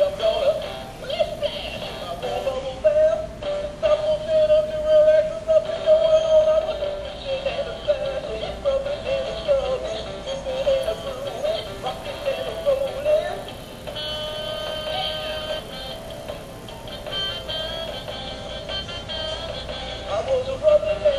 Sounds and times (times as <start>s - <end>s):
Music: 0.0s - 21.1s.